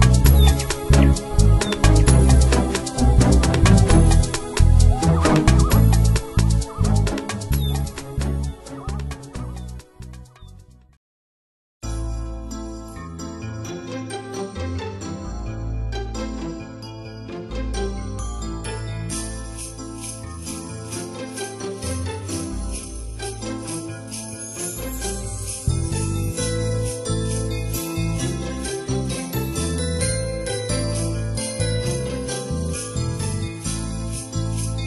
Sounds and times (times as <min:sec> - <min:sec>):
Music: 0:00.0 - 0:11.0, 0:11.8 - 0:34.8.